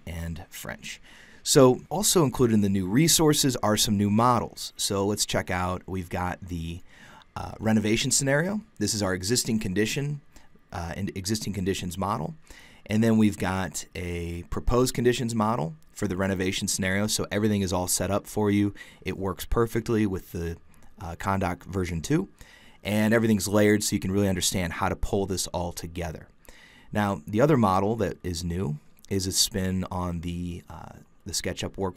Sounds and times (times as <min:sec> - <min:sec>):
Speech: 0:00.0 - 0:06.8, 0:07.4 - 0:26.3, 0:26.9 - 0:31.9.